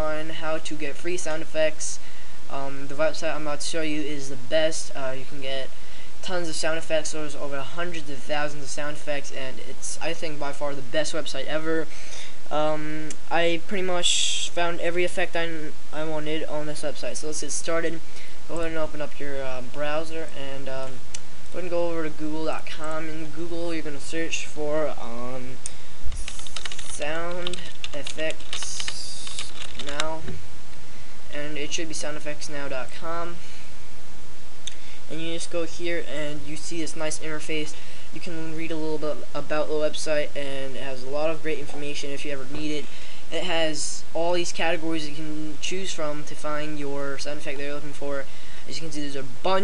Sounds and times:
Speech: 0.0s - 11.9s, 12.5s - 25.6s, 26.8s - 30.4s, 31.3s - 33.4s, 35.1s - 49.6s.

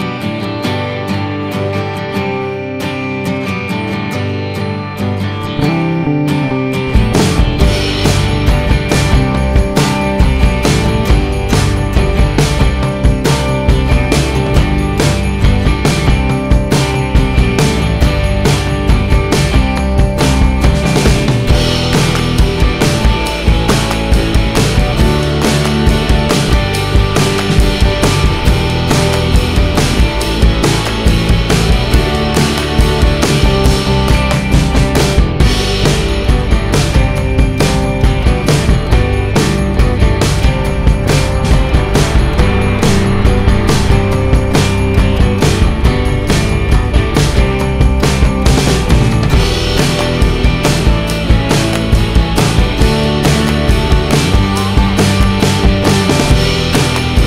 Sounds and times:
Music: 0.0s - 57.2s.

